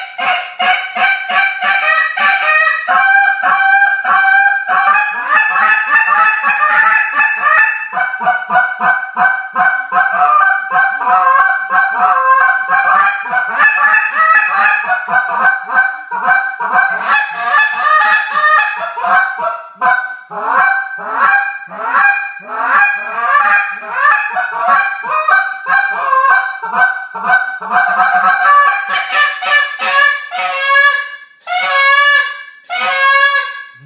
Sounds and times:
Honk: 0.0 - 33.8.

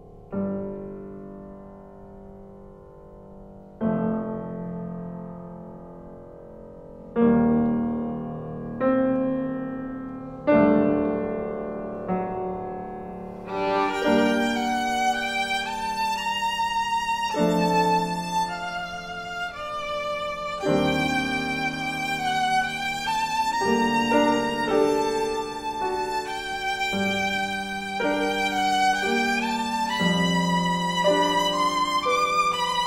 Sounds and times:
Violin, fiddle: 13.4 - 32.8.

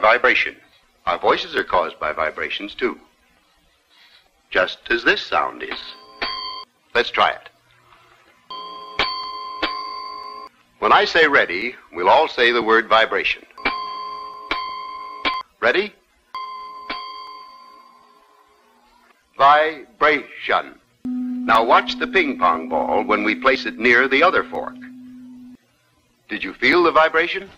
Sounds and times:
Speech: 0.0 - 3.1, 4.5 - 6.0, 7.0 - 7.6, 10.8 - 13.6, 15.6 - 16.0, 19.4 - 20.8, 21.5 - 25.5, 26.3 - 27.5.

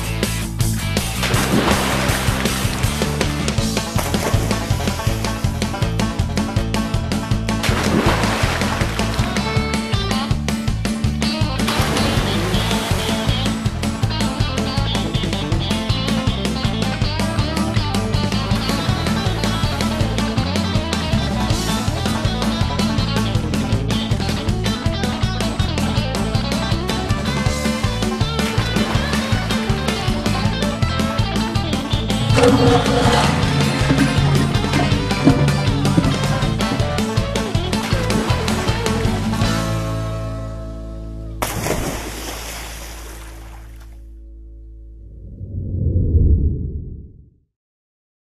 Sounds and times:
Music: 0.0 - 42.2, 43.2 - 45.0.

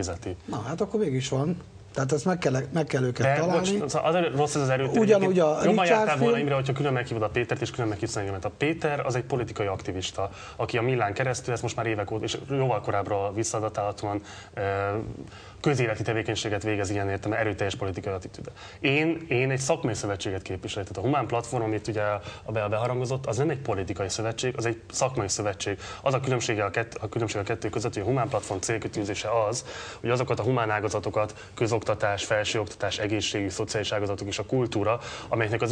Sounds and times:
Speech: 0.0 - 35.7.

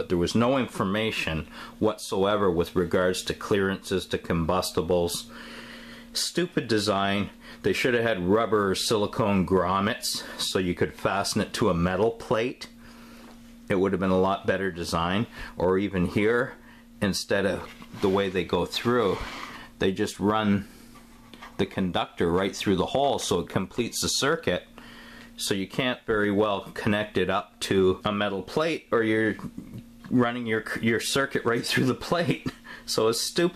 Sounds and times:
Speech: 0.0 - 5.3, 6.2 - 12.8, 13.7 - 20.8, 21.6 - 24.7, 25.4 - 33.5.

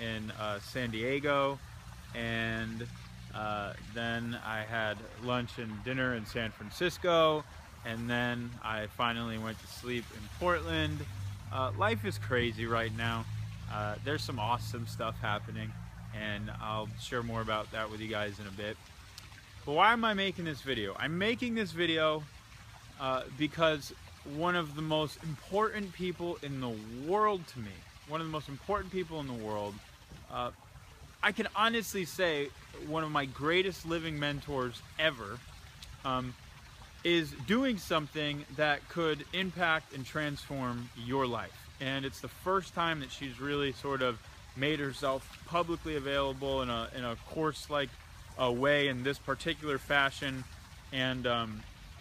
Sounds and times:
Speech: 0.0 - 1.6, 2.2 - 18.8, 19.7 - 22.3, 23.0 - 30.6, 31.2 - 35.4, 36.0 - 36.4, 37.1 - 51.7.

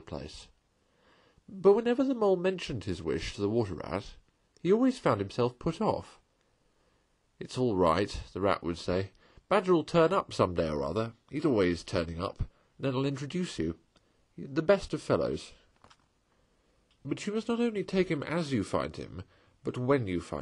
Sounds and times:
Speech: 0.0 - 0.6, 1.5 - 6.2, 7.4 - 13.8, 14.4 - 15.7, 17.0 - 20.4.

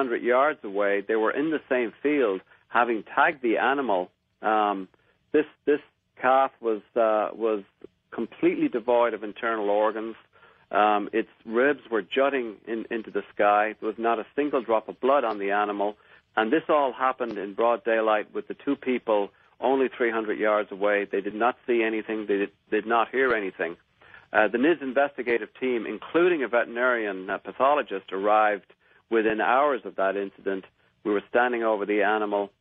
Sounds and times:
Speech: 0.0 - 32.6.

